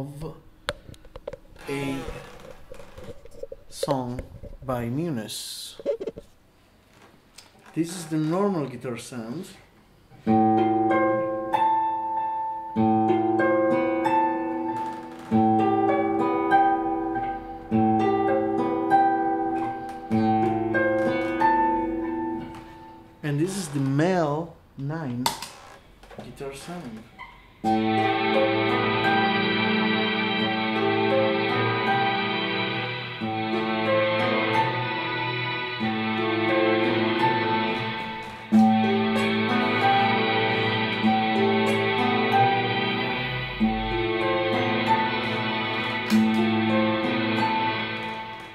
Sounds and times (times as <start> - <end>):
Creak: 1.6 - 3.4, 6.9 - 8.4, 14.8 - 15.4, 23.6 - 24.0, 25.3 - 27.5.